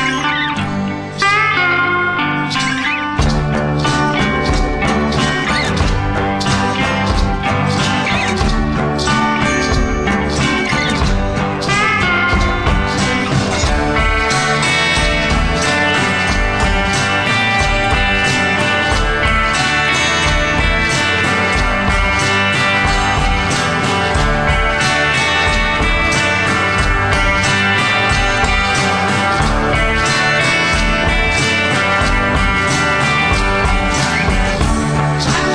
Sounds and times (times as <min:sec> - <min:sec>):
Music: 0:00.0 - 0:35.5.